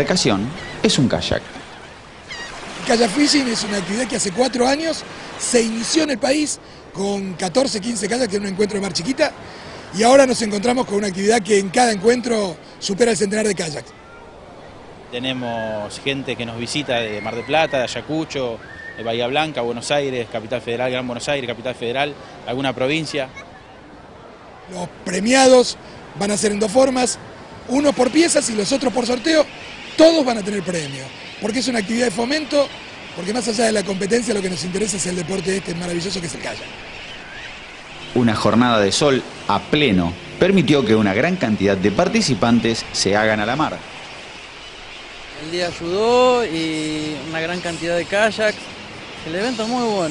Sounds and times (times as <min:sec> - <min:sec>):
Speech: 0:24.7 - 0:36.7, 0:45.4 - 0:48.6, 0:49.2 - 0:50.1.